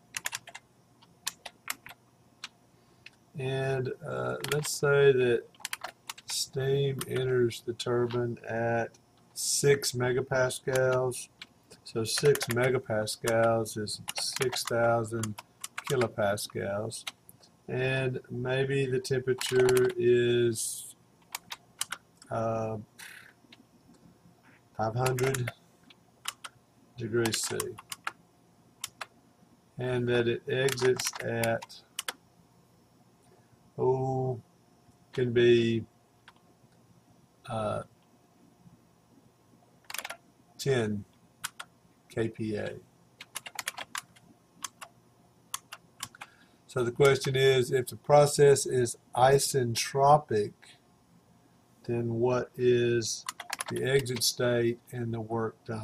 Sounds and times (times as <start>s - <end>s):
Typing: 0.1s - 2.0s, 4.4s - 4.8s, 5.5s - 6.4s, 12.2s - 16.1s, 19.4s - 20.0s, 21.2s - 22.0s, 25.0s - 25.6s, 26.2s - 26.6s, 27.2s - 28.2s, 28.8s - 29.1s, 30.6s - 32.2s, 39.8s - 40.2s, 41.4s - 41.7s, 43.2s - 44.9s, 45.5s - 46.3s, 53.2s - 54.2s
Speech: 3.4s - 5.5s, 6.3s - 17.1s, 17.7s - 21.0s, 22.3s - 23.1s, 24.8s - 25.6s, 27.0s - 27.8s, 29.8s - 31.8s, 33.8s - 34.4s, 35.2s - 35.9s, 37.5s - 37.9s, 40.6s - 41.1s, 42.1s - 42.8s, 46.7s - 50.7s, 51.8s - 55.8s.